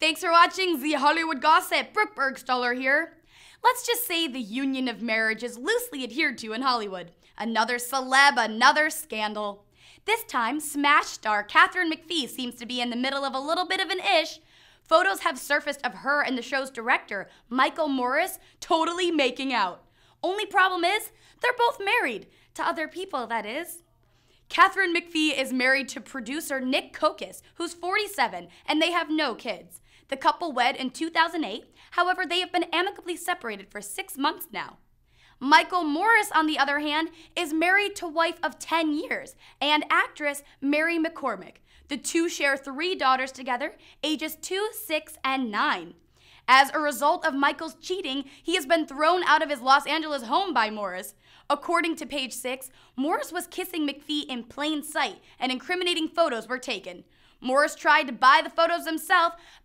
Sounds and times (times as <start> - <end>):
Speech: 0.0 - 23.8, 24.5 - 34.8, 35.4 - 59.4.